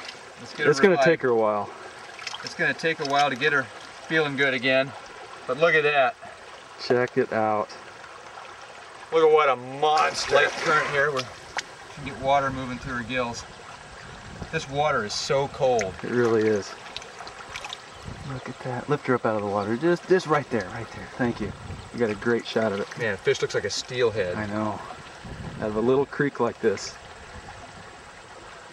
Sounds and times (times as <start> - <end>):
Stream: 0.0 - 28.7
Speech: 0.4 - 1.7, 2.4 - 6.2, 6.8 - 7.8, 9.1 - 11.3, 12.0 - 13.4, 14.5 - 16.8, 18.2 - 24.9, 25.6 - 27.0.